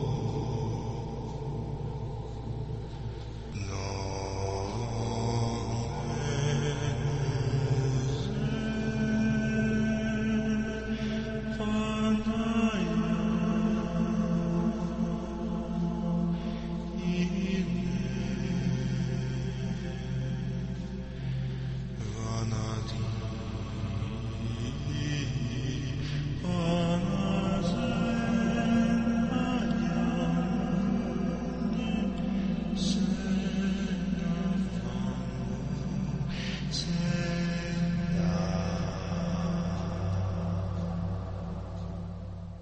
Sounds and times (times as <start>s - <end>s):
Mantra: 0.0s - 42.6s.